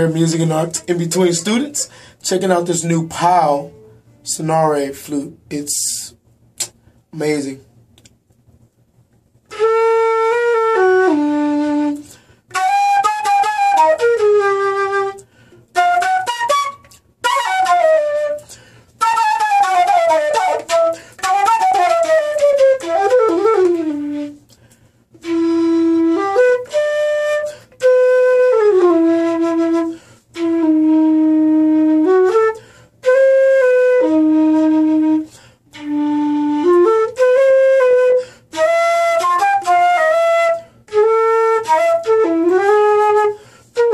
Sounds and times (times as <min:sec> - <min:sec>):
Flute: 0:09.4 - 0:24.6, 0:25.2 - 0:43.9.